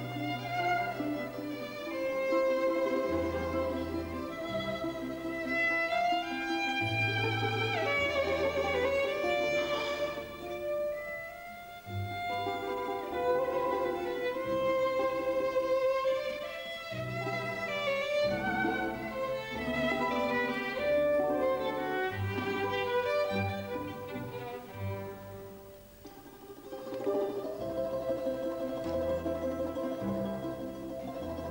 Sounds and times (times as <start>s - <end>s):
Violin, fiddle: 0.0s - 31.5s.